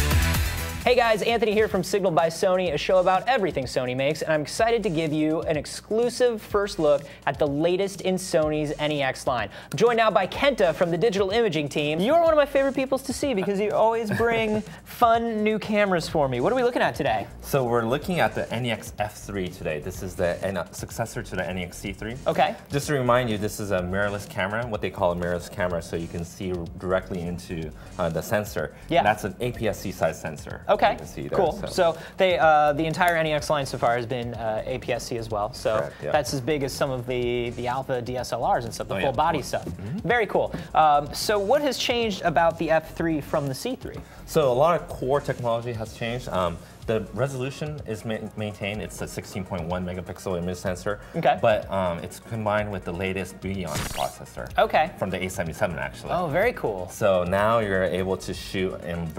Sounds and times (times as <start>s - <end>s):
Music: 0.0s - 59.1s
Speech: 0.9s - 59.1s.